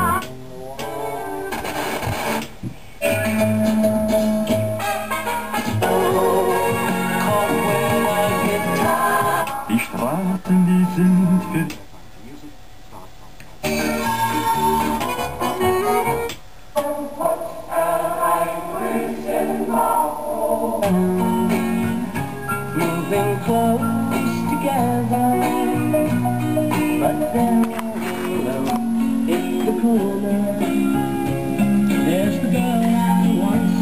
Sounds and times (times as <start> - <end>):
Music: 0.0 - 11.8, 13.6 - 33.8.